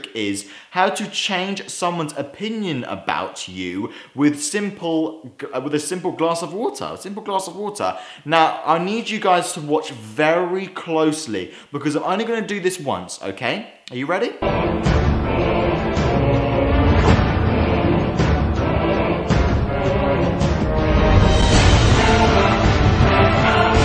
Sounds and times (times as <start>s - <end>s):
Speech: 0.0s - 14.4s.